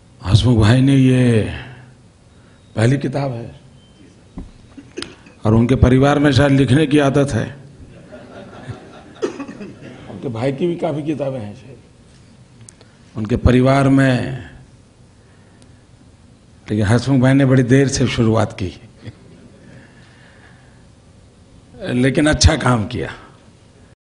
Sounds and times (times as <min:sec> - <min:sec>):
Narration, monologue: 0:00.0 - 0:24.0
Male speech, man speaking: 0:00.2 - 0:01.8, 0:02.8 - 0:03.6, 0:05.4 - 0:07.7, 0:10.1 - 0:11.9, 0:13.2 - 0:14.6, 0:16.7 - 0:18.9, 0:21.8 - 0:23.4.